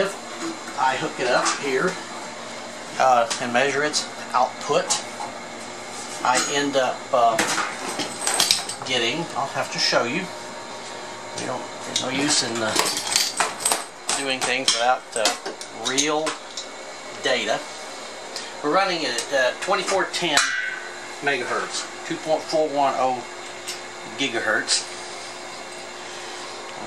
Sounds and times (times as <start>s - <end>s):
Speech: 0.0s - 0.2s, 0.8s - 2.0s, 3.0s - 5.1s, 6.2s - 7.5s, 8.8s - 10.4s, 11.4s - 13.1s, 14.1s - 16.4s, 17.2s - 17.7s, 18.6s - 20.6s, 21.2s - 23.3s, 24.0s - 24.9s.